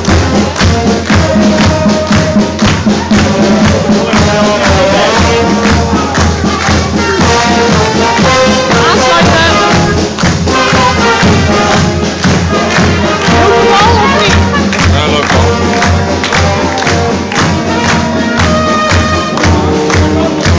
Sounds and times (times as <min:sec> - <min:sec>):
Music: 0:00.0 - 0:20.5.